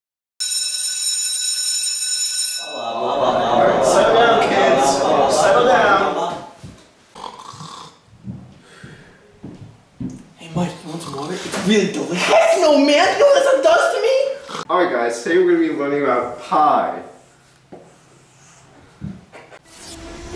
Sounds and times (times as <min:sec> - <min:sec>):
Inside, large room or hall: 0:02.7 - 0:06.5
Speech: 0:02.8 - 0:06.5, 0:10.4 - 0:17.2.